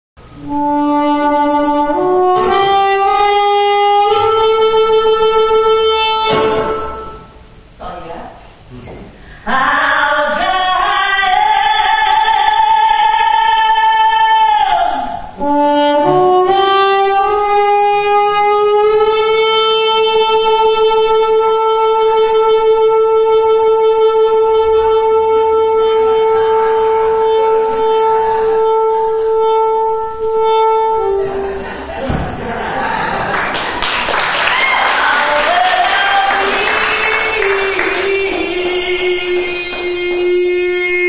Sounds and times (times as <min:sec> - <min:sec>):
Music: 0:00.2 - 0:07.6, 0:10.3 - 0:32.2, 0:33.6 - 0:41.0.